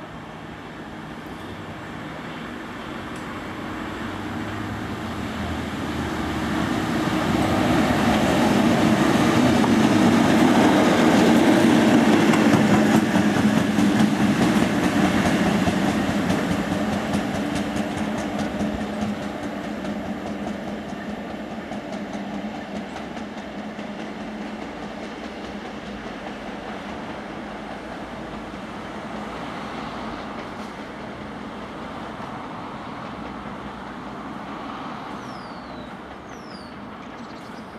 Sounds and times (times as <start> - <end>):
Outside, urban or manmade: 0.0 - 37.7
Train: 0.0 - 37.7.